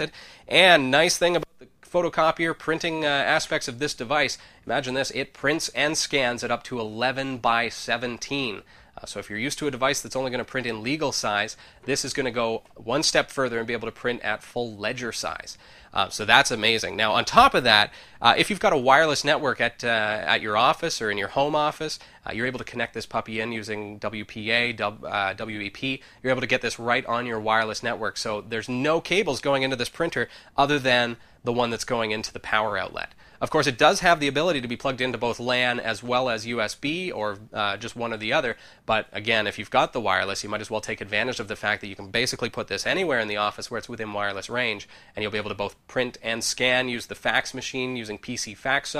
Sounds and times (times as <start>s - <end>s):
Speech: 0.0s - 48.9s.